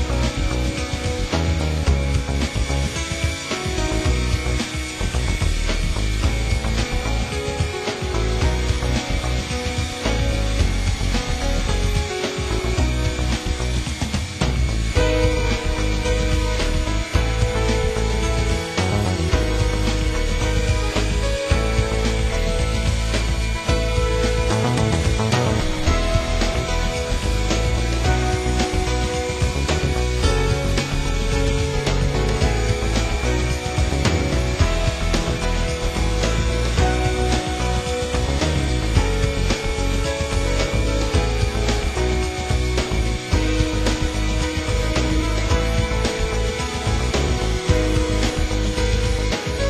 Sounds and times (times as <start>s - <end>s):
Helicopter: 0.0s - 49.7s
Music: 0.0s - 49.7s.